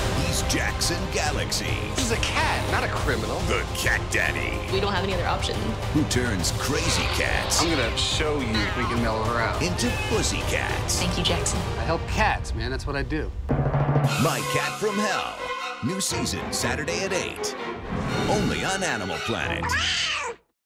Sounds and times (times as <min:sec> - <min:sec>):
Music: 0:00.0 - 0:20.0
Speech: 0:14.1 - 0:17.5, 0:18.3 - 0:19.8.